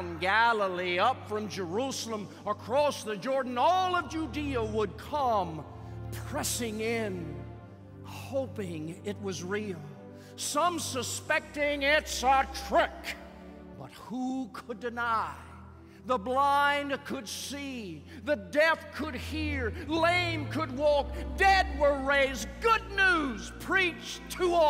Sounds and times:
Narration, monologue: 0.0s - 24.7s.

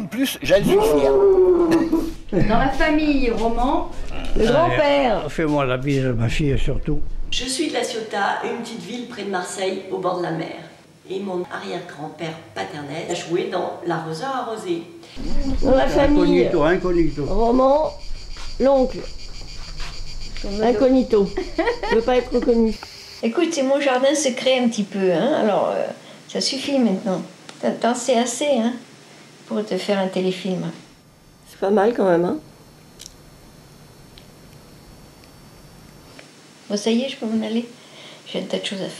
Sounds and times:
Speech: 0.0s - 1.7s, 2.5s - 17.3s.

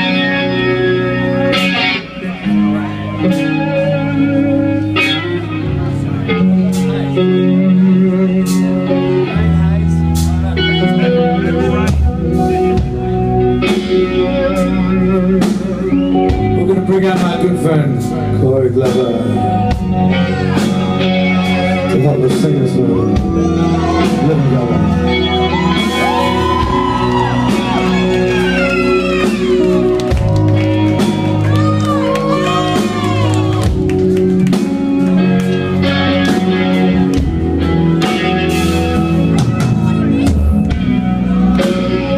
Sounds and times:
Music: 0.0s - 42.1s.

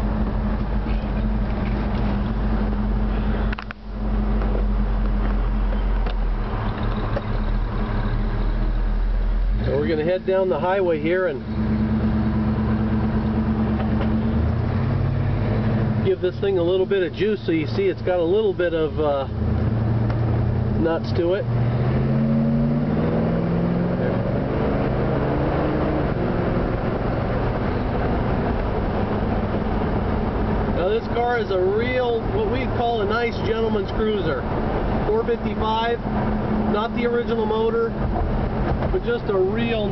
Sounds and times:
Medium engine (mid frequency): 0.0s - 39.9s
Outside, urban or manmade: 0.0s - 39.9s
Vehicle: 0.0s - 39.9s
Speech: 9.6s - 11.4s, 16.0s - 19.3s, 20.8s - 21.5s, 30.8s - 34.4s, 35.1s - 36.0s, 36.7s - 37.9s, 38.9s - 39.9s.

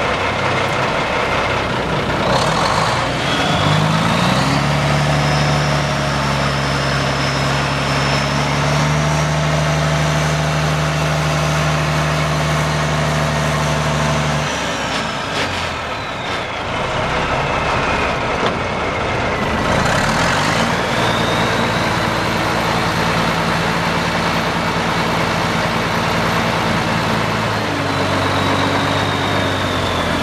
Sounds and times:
Truck: 0.0s - 30.2s.

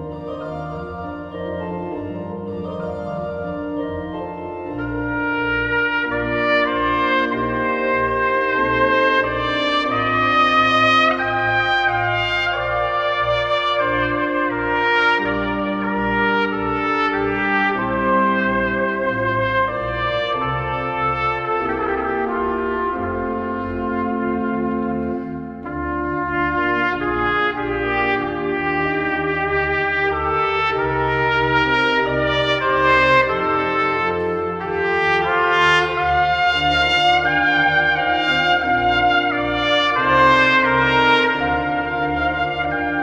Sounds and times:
Trumpet: 0.0s - 43.0s.

